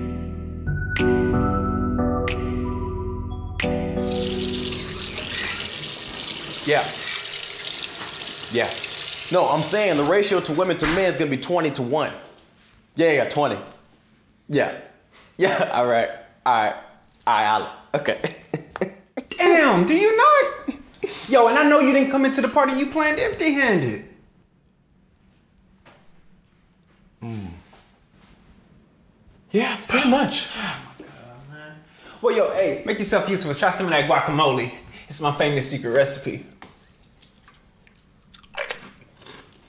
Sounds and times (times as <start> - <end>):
Inside, small room: 0.0 - 39.6
Water tap, faucet: 4.0 - 10.3.